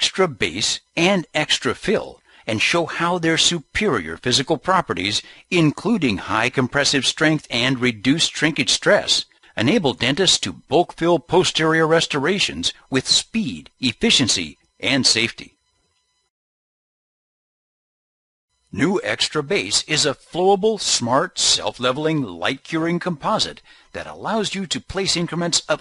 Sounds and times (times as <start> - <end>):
Speech: 0.0 - 15.6, 18.8 - 25.8.